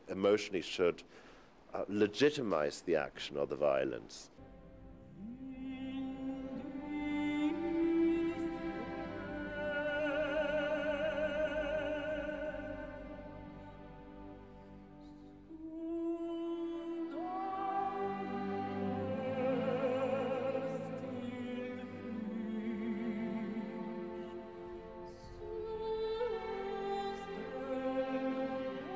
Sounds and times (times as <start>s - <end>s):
Music: 4.4s - 28.9s
Singing: 5.2s - 13.4s, 15.5s - 28.9s.